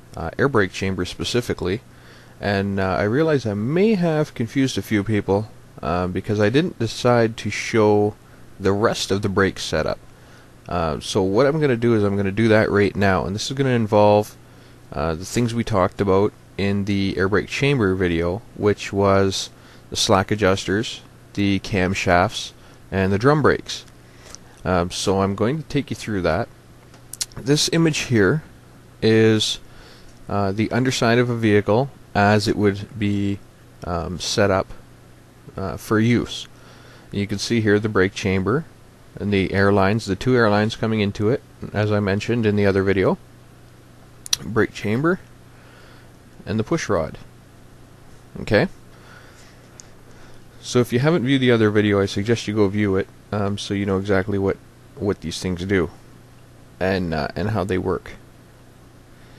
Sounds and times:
Speech: 0.2 - 1.8, 2.4 - 10.0, 10.7 - 23.9, 24.6 - 26.5, 27.2 - 29.6, 30.3 - 34.8, 35.5 - 36.5, 37.1 - 43.2, 44.3 - 45.3, 46.4 - 47.3, 48.3 - 48.8, 50.6 - 56.0, 56.8 - 58.2.

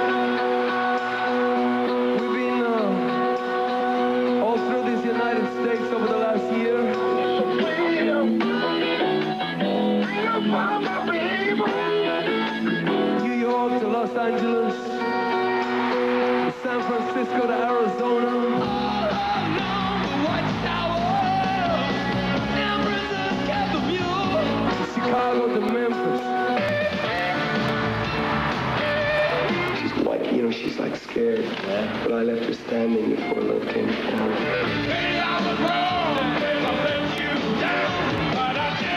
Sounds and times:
Music: 0.0 - 38.9.

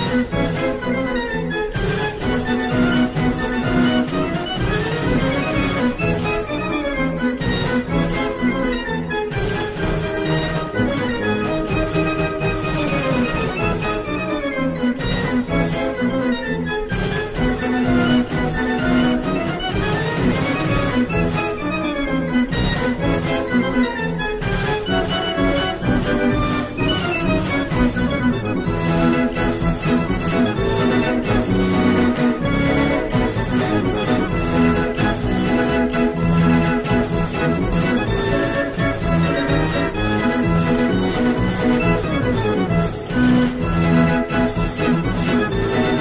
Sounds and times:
Electronic organ: 0.0 - 46.0.

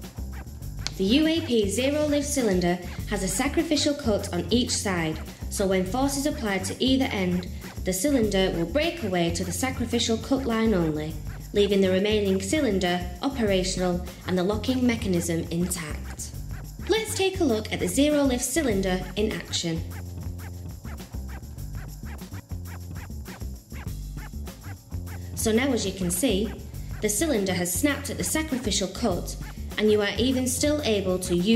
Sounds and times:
Music: 0.0 - 31.5
Speech: 0.9 - 16.3, 16.9 - 19.9, 25.4 - 31.5.

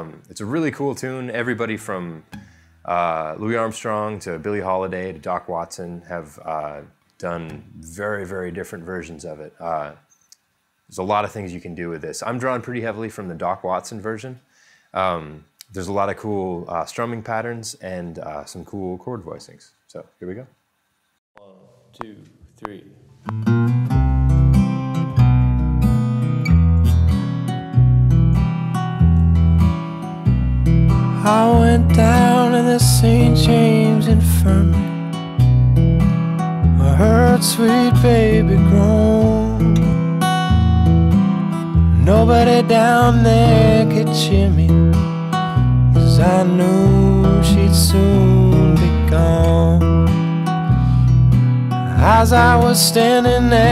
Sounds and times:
Acoustic guitar: 0.0 - 5.1, 23.1 - 53.7.

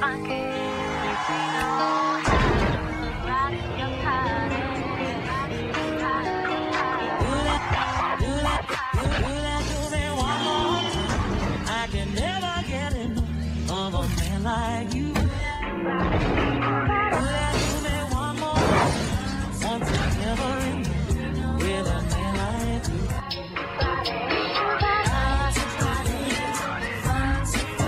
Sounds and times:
Music: 0.0 - 27.8.

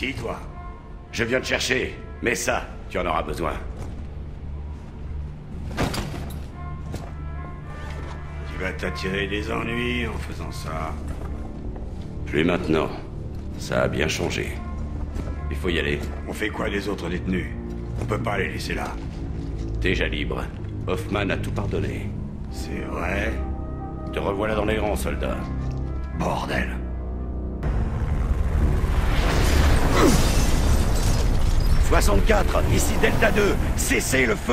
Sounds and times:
Music: 0.0 - 34.5.

